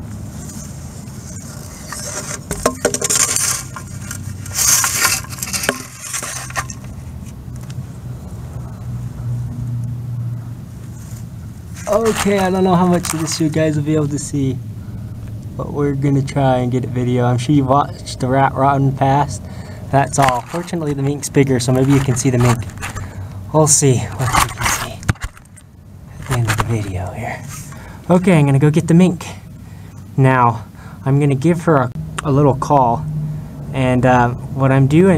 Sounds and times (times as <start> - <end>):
Outside, rural or natural: 0.0 - 35.1.